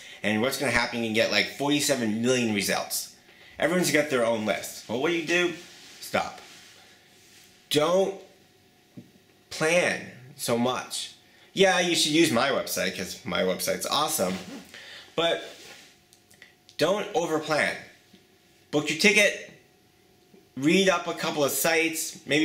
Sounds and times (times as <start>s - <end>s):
Speech: 0.0s - 6.5s, 7.7s - 8.4s, 9.5s - 14.6s, 15.2s - 15.6s, 16.7s - 18.0s, 18.7s - 19.6s, 20.6s - 22.4s.